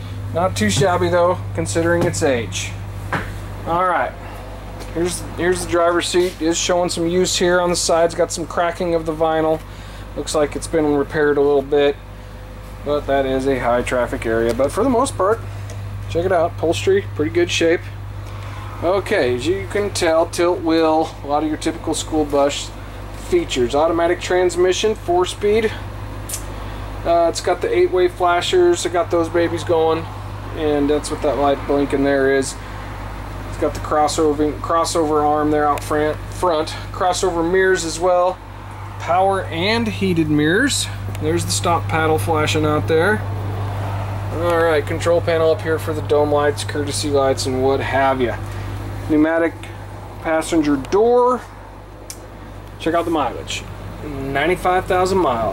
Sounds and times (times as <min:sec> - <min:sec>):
Speech: 0:00.3 - 0:02.8, 0:03.6 - 0:04.3, 0:04.9 - 0:12.0, 0:12.8 - 0:15.4, 0:16.1 - 0:18.0, 0:18.8 - 0:25.8, 0:27.0 - 0:32.6, 0:33.5 - 0:38.4, 0:39.0 - 0:43.3, 0:44.3 - 0:48.4, 0:49.1 - 0:51.5, 0:52.8 - 0:55.5.